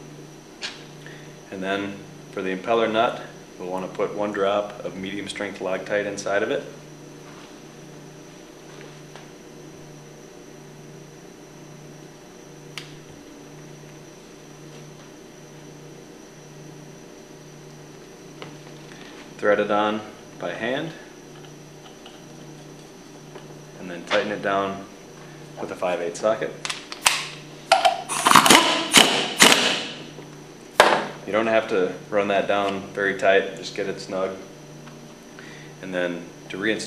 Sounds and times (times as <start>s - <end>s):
Power tool: 28.0s - 30.1s.